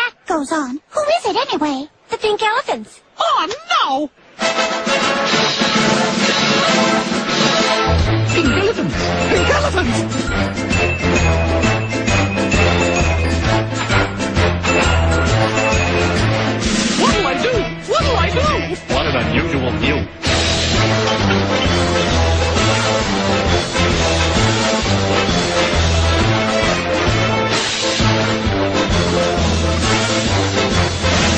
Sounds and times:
Speech: 0:00.0 - 0:04.1, 0:08.4 - 0:10.0, 0:17.0 - 0:20.1
Music: 0:04.3 - 0:31.3.

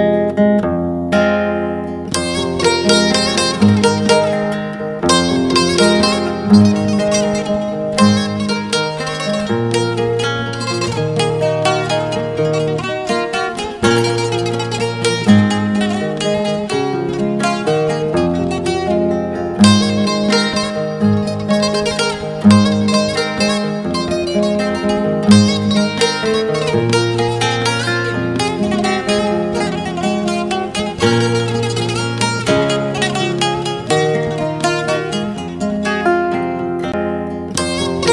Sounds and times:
Music: 0:00.0 - 0:38.1.

